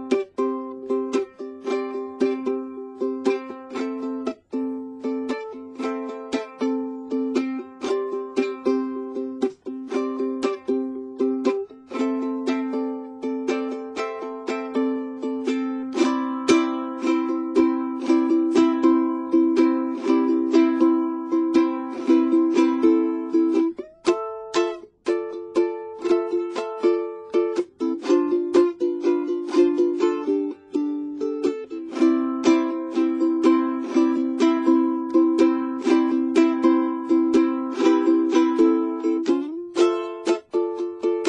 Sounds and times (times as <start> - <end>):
Ukulele: 0.0 - 41.2.